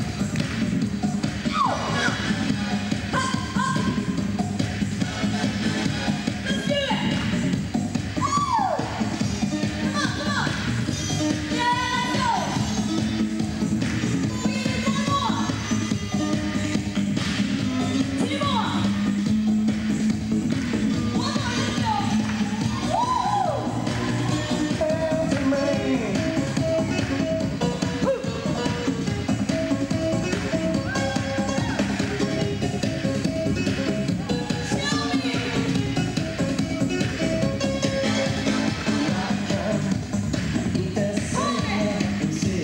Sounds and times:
Music: 0.0s - 42.6s.

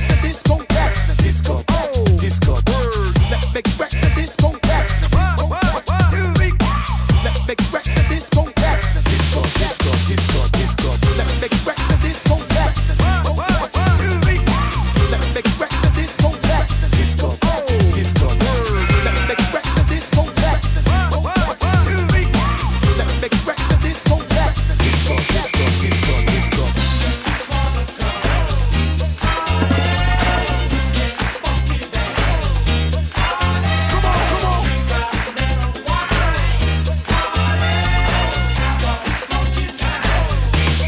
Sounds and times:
Music: 0.0s - 40.8s.

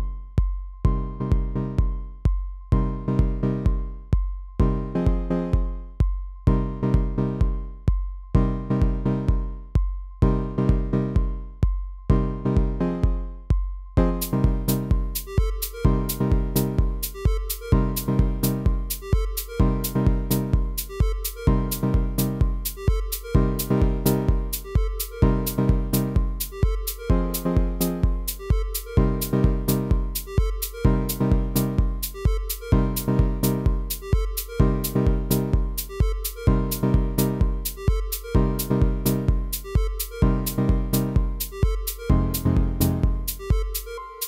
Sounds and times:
Dance music: 14.0s - 44.2s.

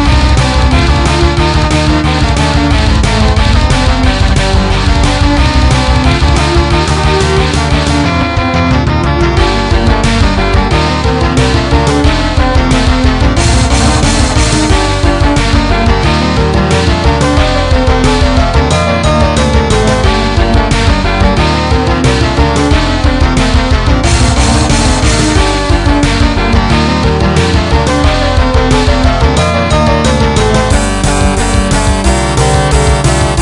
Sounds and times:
Electric guitar: 0.0s - 33.4s.

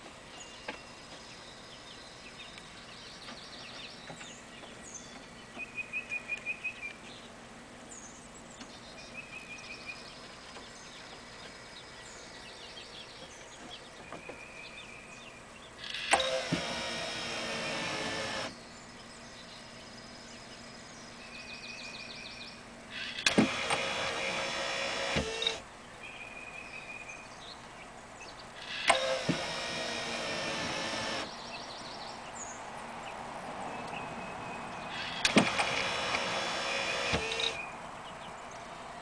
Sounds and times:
Sliding door: 15.9s - 18.5s, 23.0s - 25.6s, 28.6s - 31.3s, 34.9s - 37.6s.

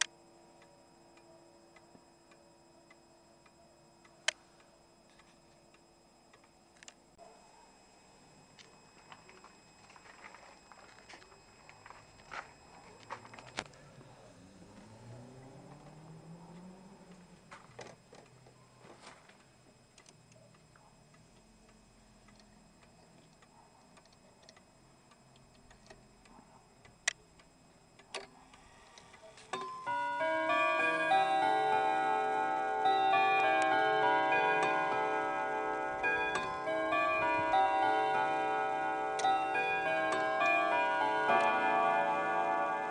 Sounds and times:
Tubular bells: 29.7s - 42.9s.

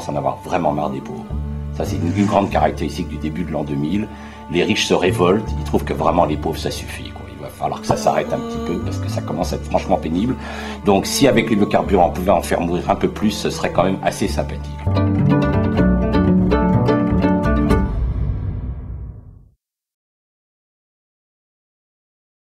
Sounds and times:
Speech: 0.0s - 14.7s
Music: 0.0s - 19.6s.

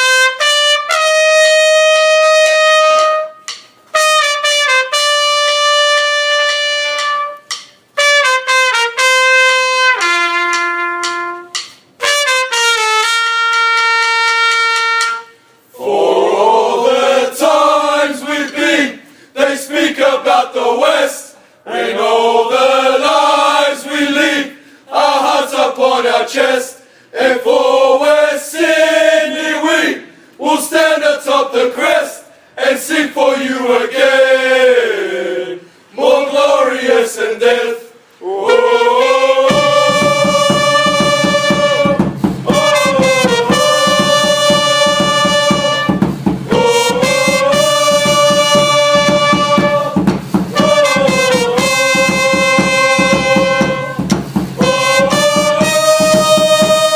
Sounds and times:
Music: 0.0s - 15.6s, 38.6s - 56.9s.

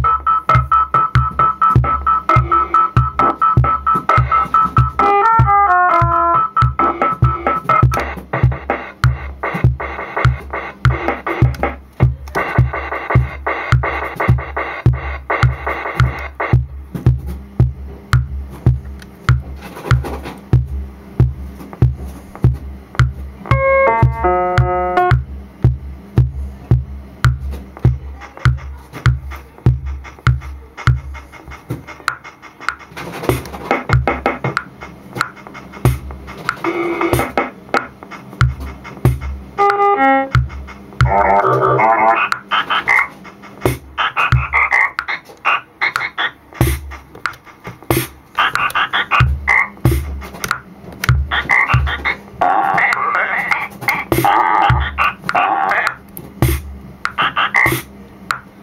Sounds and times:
Techno: 0.0s - 16.8s, 27.8s - 50.5s, 51.1s - 57.9s
Drum machine: 0.0s - 58.6s.

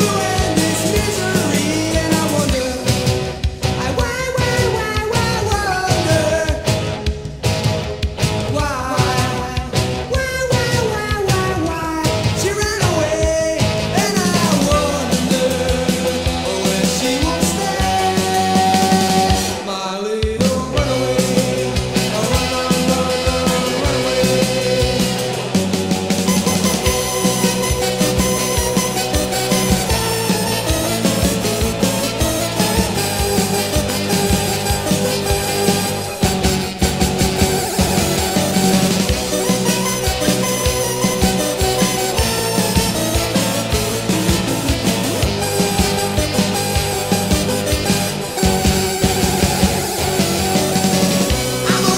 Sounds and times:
Music: 0.0s - 51.9s.

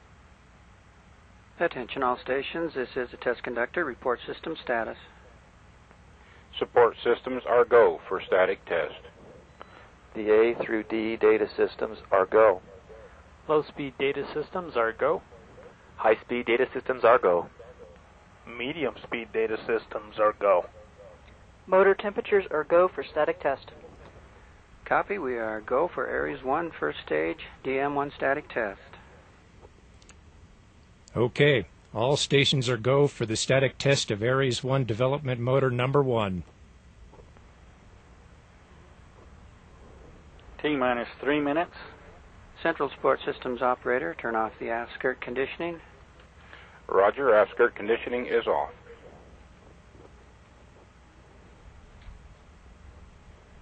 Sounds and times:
Speech: 1.6s - 5.2s, 6.5s - 9.1s, 10.2s - 15.2s, 16.0s - 17.5s, 18.5s - 20.7s, 21.7s - 24.0s, 24.8s - 29.0s, 31.1s - 36.5s, 40.6s - 42.0s, 42.6s - 45.9s, 46.9s - 49.1s.

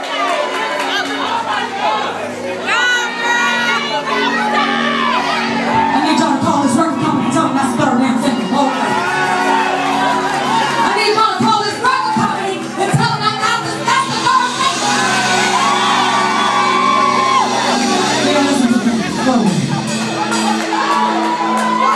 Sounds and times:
Music: 0.0s - 21.9s
Shout: 8.6s - 11.3s, 14.1s - 18.3s, 20.5s - 21.9s.

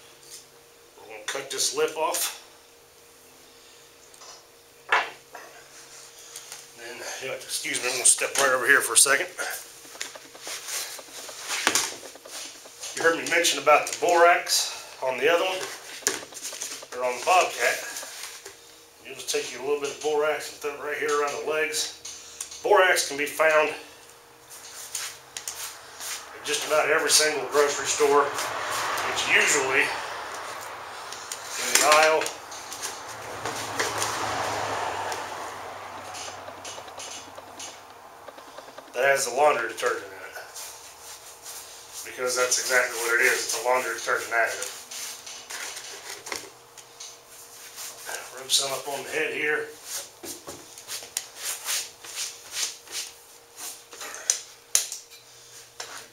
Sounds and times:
Rub: 24.5s - 26.3s, 40.5s - 42.6s, 44.2s - 46.1s, 47.3s - 48.3s, 50.8s - 53.8s.

